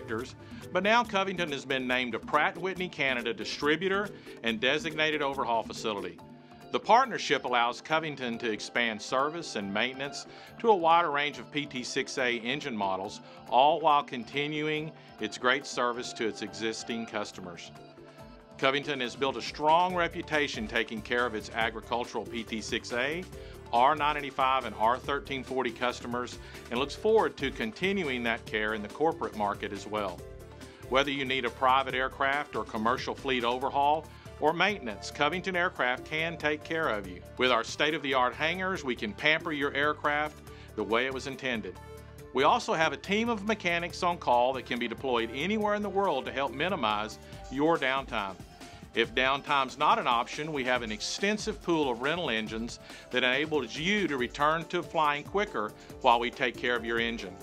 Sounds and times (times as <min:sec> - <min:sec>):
Speech: 0:00.0 - 0:06.2, 0:06.8 - 0:17.8, 0:18.6 - 0:30.2, 0:30.9 - 0:41.8, 0:42.4 - 0:48.4, 0:49.0 - 0:57.4
Music: 0:00.0 - 0:57.4.